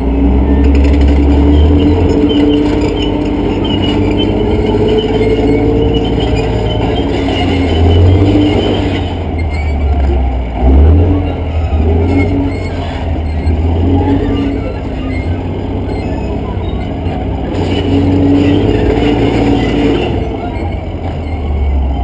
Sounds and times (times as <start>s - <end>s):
Outside, urban or manmade: 0.0s - 22.0s
Vehicle: 0.0s - 22.0s.